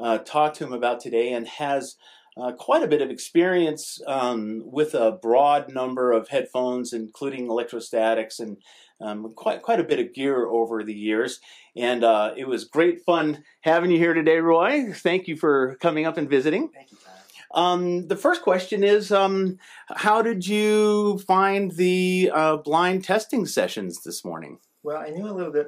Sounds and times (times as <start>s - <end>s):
Speech: 0.0s - 16.8s, 17.4s - 25.6s.